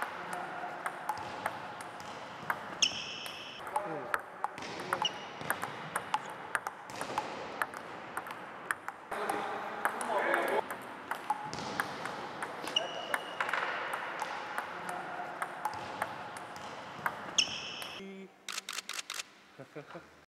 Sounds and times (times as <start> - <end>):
Speech: 0.0 - 0.8, 9.1 - 10.6, 14.6 - 15.3, 19.6 - 20.1.